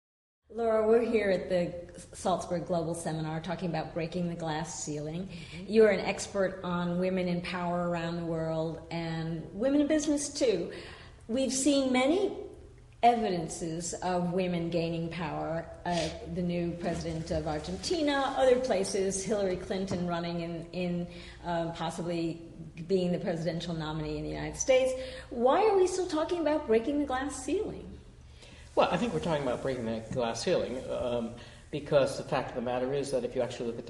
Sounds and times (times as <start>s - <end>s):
Female speech, woman speaking: 0.5s - 10.7s, 11.3s - 28.0s.